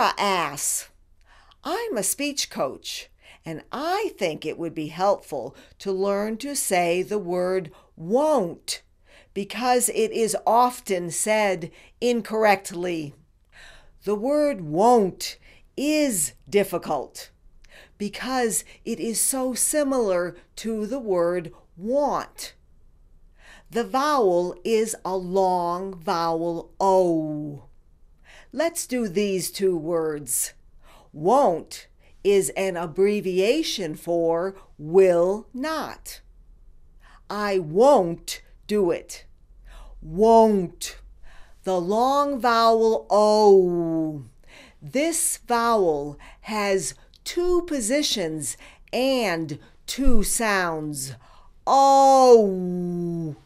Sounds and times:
Female speech, woman speaking: 0:00.0 - 0:00.9, 0:01.6 - 0:08.8, 0:09.4 - 0:13.2, 0:14.0 - 0:17.3, 0:18.0 - 0:22.6, 0:23.7 - 0:27.7, 0:28.6 - 0:30.6, 0:31.2 - 0:36.2, 0:37.3 - 0:39.3, 0:40.1 - 0:41.0, 0:41.7 - 0:44.3, 0:44.9 - 0:53.4.

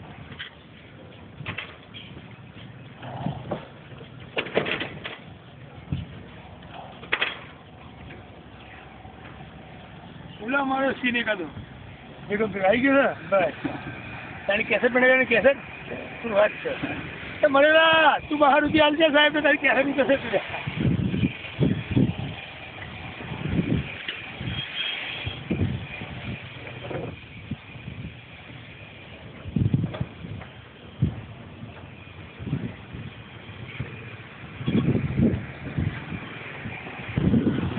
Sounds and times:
Wind noise (microphone): 0:03.0 - 0:03.7, 0:05.8 - 0:06.3, 0:20.6 - 0:28.6, 0:29.3 - 0:37.7.

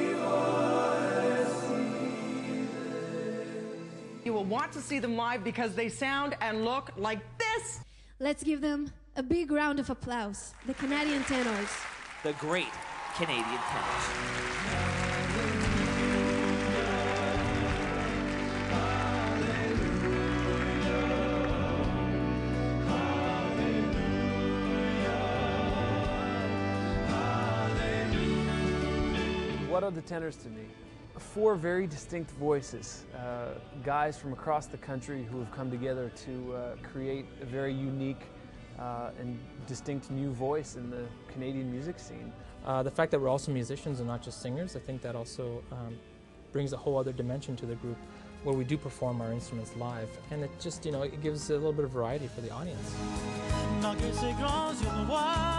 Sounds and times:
Music: 0:00.0 - 0:55.5.

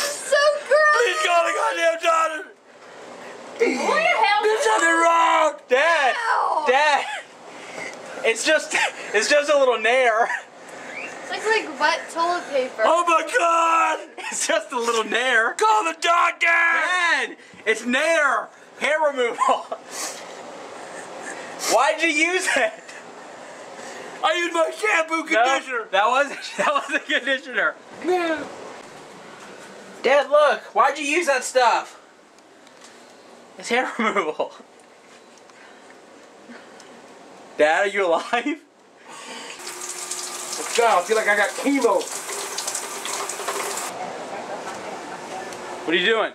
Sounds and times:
Water: 0:39.3 - 0:44.0.

